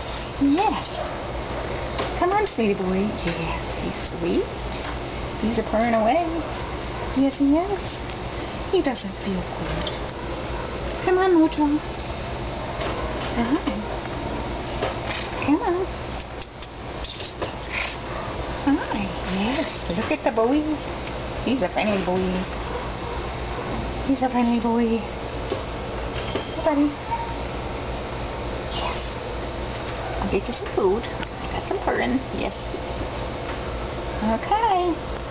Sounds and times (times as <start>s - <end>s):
Speech: 0.0s - 1.1s, 2.2s - 4.5s, 5.4s - 6.4s, 7.2s - 8.1s, 8.7s - 9.9s, 11.1s - 11.8s, 15.4s - 15.9s, 18.7s - 20.8s, 21.5s - 22.5s, 24.1s - 25.1s, 26.6s - 27.0s, 30.2s - 33.4s, 34.2s - 35.0s.